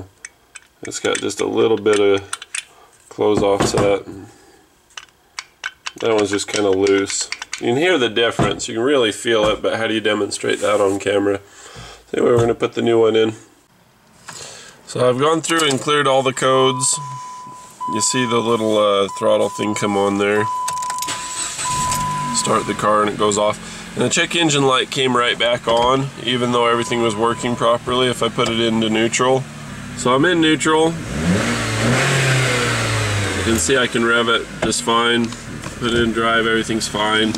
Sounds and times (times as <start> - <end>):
Car: 15.5 - 37.3.